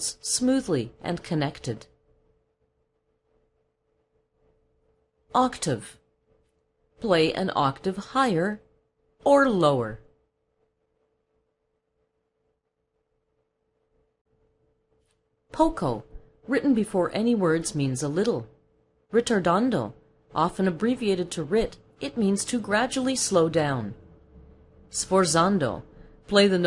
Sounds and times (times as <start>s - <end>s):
Narration, monologue: 0.0s - 11.3s, 14.4s - 26.6s.